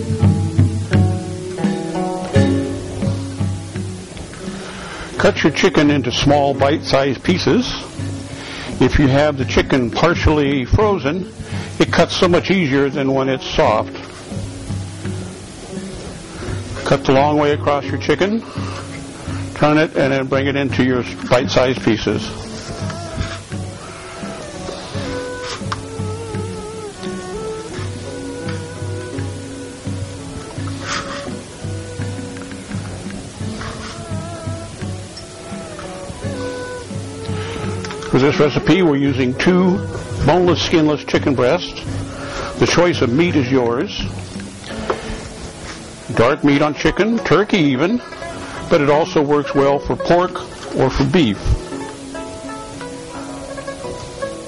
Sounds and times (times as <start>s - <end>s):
Music: 0.0s - 54.4s
Speech: 5.2s - 7.8s, 8.8s - 13.9s, 16.9s - 18.4s, 19.6s - 22.3s, 38.1s - 41.8s, 42.6s - 44.1s, 46.1s - 48.0s, 48.7s - 51.6s.